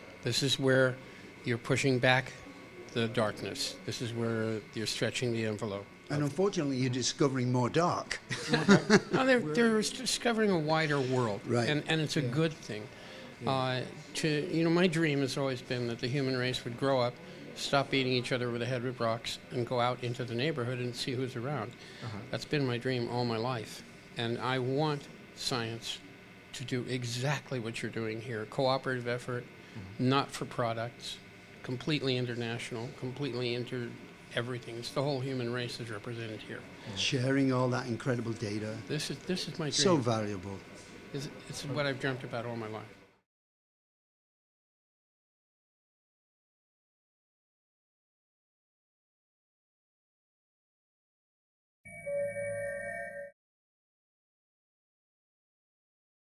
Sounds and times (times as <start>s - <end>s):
Speech: 0.2s - 8.3s, 9.1s - 42.9s.